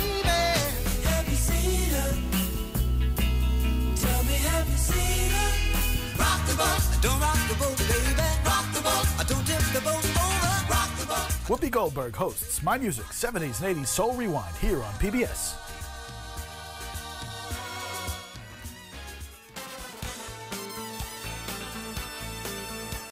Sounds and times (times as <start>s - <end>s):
Music: 0.0s - 23.1s
Speech: 11.5s - 15.6s.